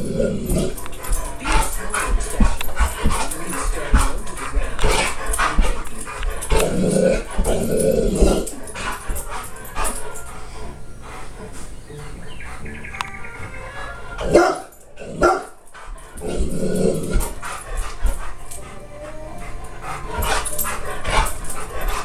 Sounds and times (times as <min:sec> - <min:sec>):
Music: 0:00.0 - 0:22.0
Bow-wow: 0:14.3 - 0:15.6.